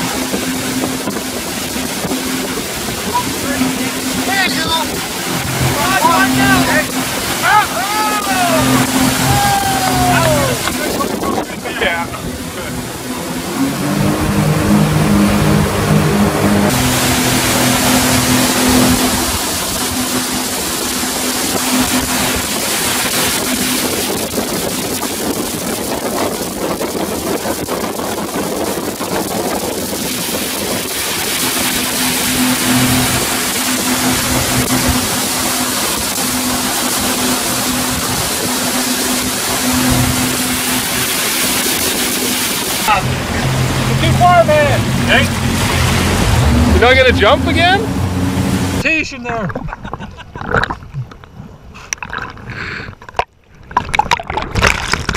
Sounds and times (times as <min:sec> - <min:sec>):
Boat, Water vehicle: 0:00.0 - 0:55.1
Outside, rural or natural: 0:00.0 - 0:55.1
Speech: 0:03.2 - 0:05.0, 0:44.0 - 0:45.3, 0:46.8 - 0:47.9, 0:48.8 - 0:49.6.